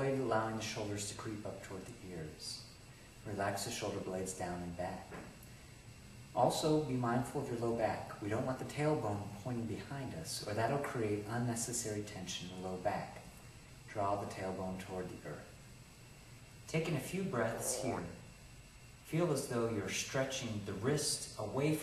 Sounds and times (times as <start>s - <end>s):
Speech: 0.0s - 5.3s, 6.4s - 13.3s, 13.9s - 15.6s, 16.7s - 18.3s, 19.0s - 21.8s.